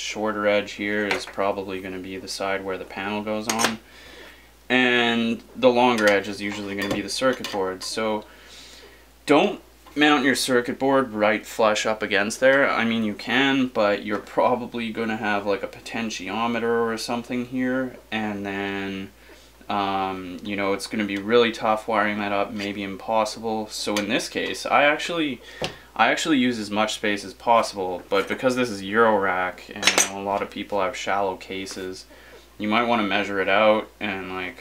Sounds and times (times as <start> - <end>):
Speech: 0.0 - 3.8, 4.7 - 8.3, 9.2 - 25.4, 26.0 - 34.6.